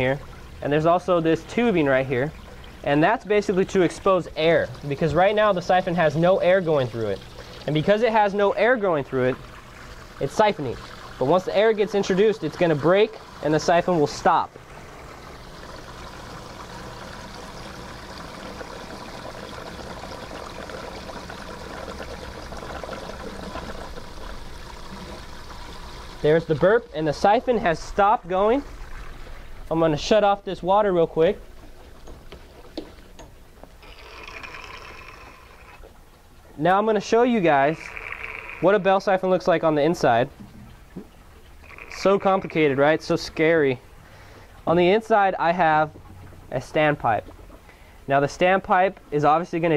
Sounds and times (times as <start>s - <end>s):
Speech: 0.0s - 9.4s, 10.2s - 14.5s, 26.2s - 28.7s, 29.7s - 31.4s, 36.6s - 37.9s, 38.6s - 40.3s, 42.0s - 43.8s, 44.7s - 47.3s, 48.1s - 49.7s.